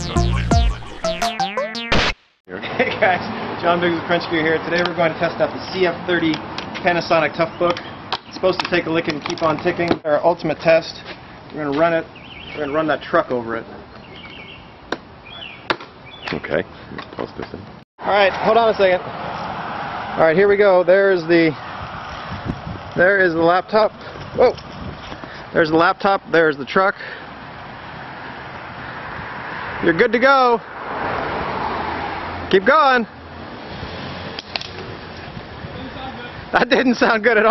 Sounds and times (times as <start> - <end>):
Speech: 2.5 - 7.8, 8.4 - 13.8, 16.3 - 19.0, 20.2 - 21.6, 23.0 - 24.6, 25.6 - 27.1, 29.8 - 30.6, 32.5 - 33.1, 35.7 - 37.5
Car: 18.4 - 20.5, 27.0 - 35.7.